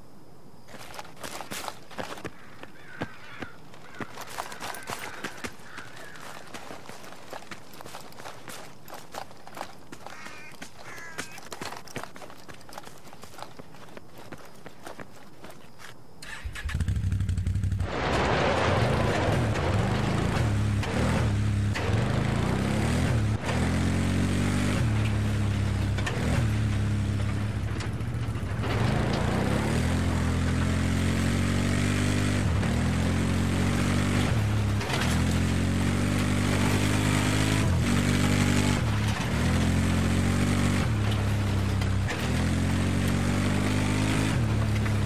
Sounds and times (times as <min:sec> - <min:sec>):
Walk, footsteps: 0:00.7 - 0:16.0.